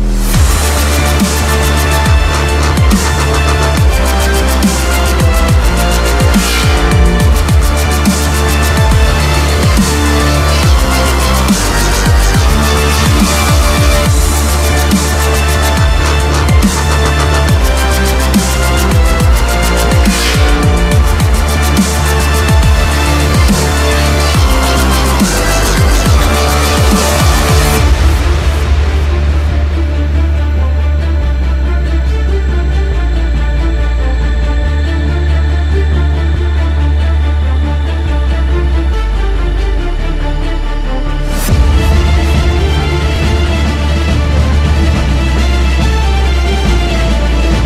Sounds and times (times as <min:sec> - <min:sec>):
Dubstep: 0:00.0 - 0:47.6.